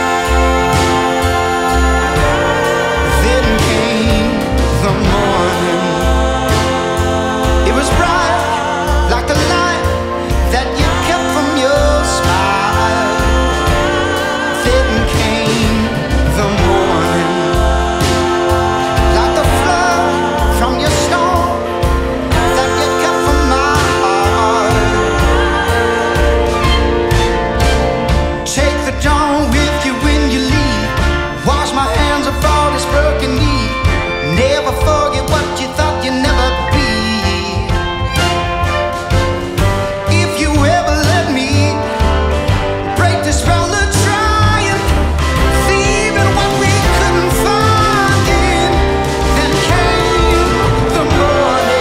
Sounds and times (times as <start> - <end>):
Music: 0.0 - 51.8.